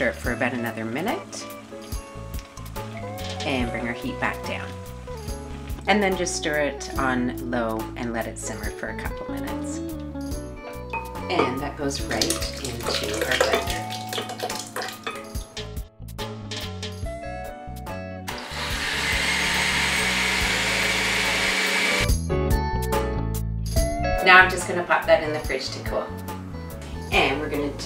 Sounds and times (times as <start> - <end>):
Speech: 0.0 - 1.4, 3.4 - 4.7, 5.9 - 9.8, 11.3 - 13.8, 24.2 - 26.2, 27.1 - 27.8
Music: 0.0 - 27.8.